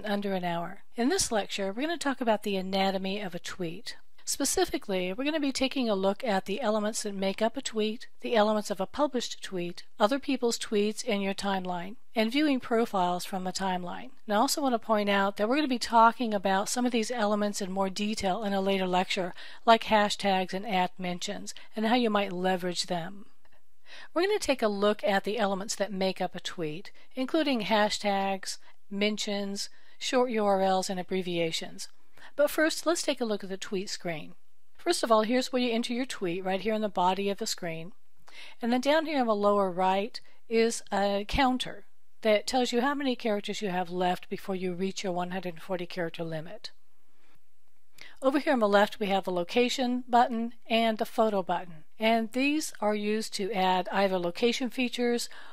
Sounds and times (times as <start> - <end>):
Speech: 0.0 - 23.2, 24.2 - 38.0, 38.6 - 46.8, 48.2 - 55.3.